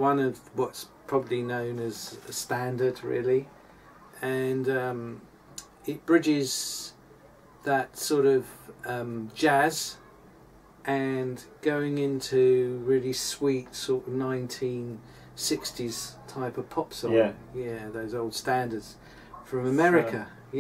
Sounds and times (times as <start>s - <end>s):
Speech: 0.0s - 3.5s, 4.2s - 7.0s, 7.6s - 10.0s, 10.9s - 20.6s.